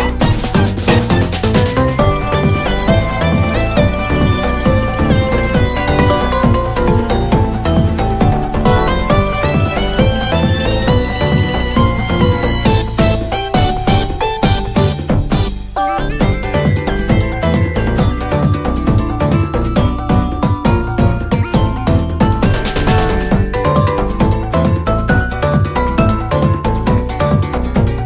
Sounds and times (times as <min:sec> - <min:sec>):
Music: 0:00.0 - 0:28.0.